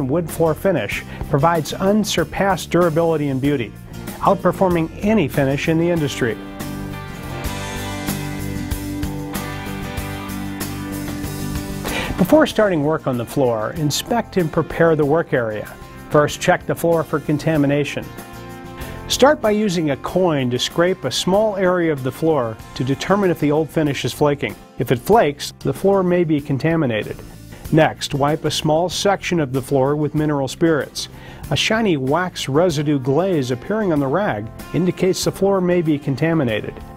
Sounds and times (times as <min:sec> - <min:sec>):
Speech: 0:00.0 - 0:06.4, 0:12.2 - 0:18.1, 0:19.1 - 0:36.8
Music: 0:00.0 - 0:36.9.